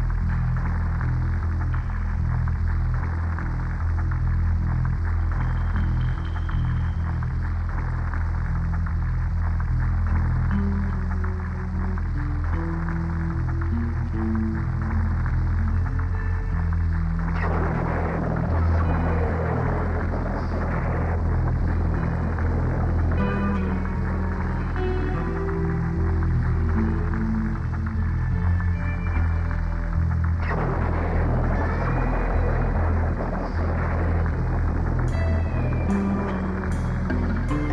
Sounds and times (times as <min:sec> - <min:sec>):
Music: 0:00.0 - 0:37.7.